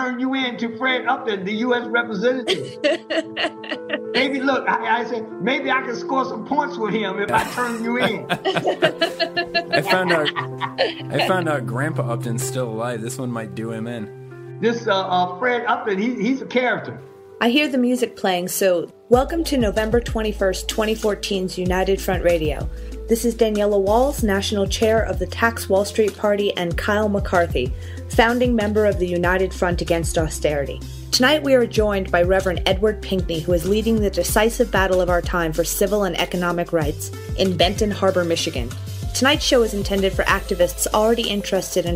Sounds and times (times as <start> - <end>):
Music: 0.0 - 41.9
Speech: 0.0 - 41.9.